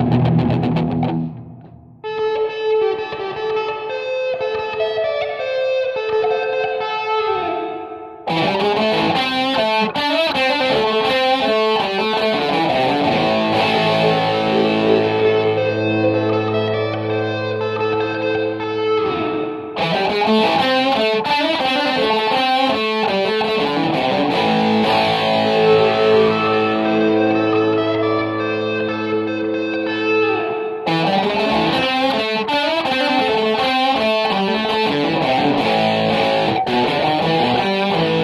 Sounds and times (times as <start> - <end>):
Electric guitar: 0.0 - 38.2.